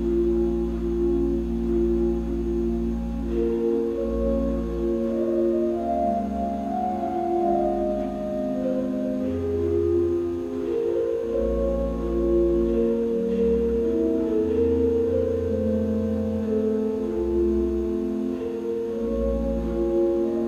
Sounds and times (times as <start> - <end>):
Hammond organ: 0.0 - 20.4.